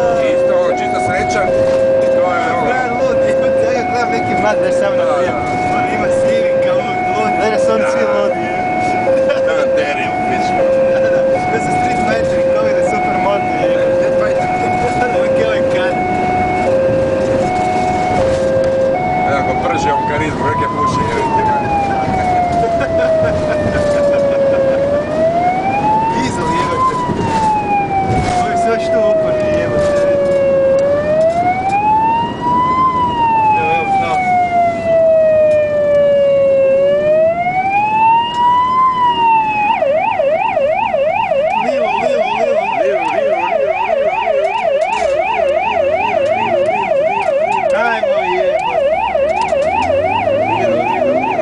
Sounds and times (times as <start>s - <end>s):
Emergency vehicle: 0.0s - 51.4s
Siren: 0.0s - 51.4s.